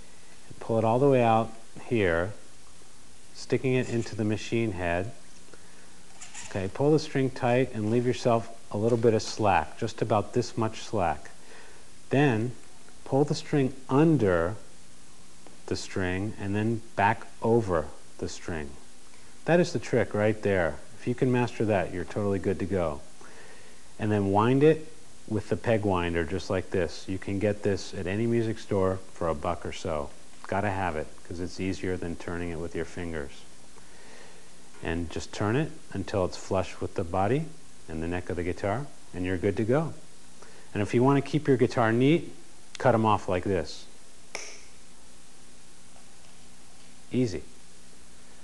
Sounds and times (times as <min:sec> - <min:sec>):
Speech: 0:00.5 - 0:02.4, 0:03.4 - 0:05.2, 0:06.5 - 0:11.4, 0:12.1 - 0:14.7, 0:15.6 - 0:18.8, 0:19.4 - 0:23.1, 0:24.0 - 0:33.5, 0:34.8 - 0:40.0, 0:40.7 - 0:44.0, 0:47.1 - 0:47.6.